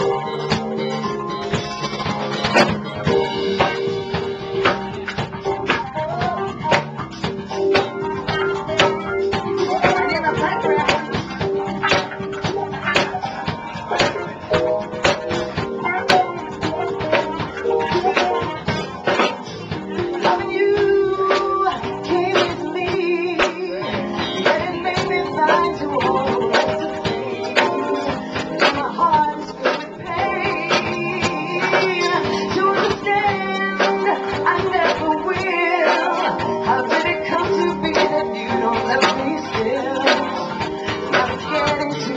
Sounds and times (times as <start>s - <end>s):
Music: 0.0s - 42.1s
Female singing: 9.6s - 11.2s, 20.0s - 42.1s.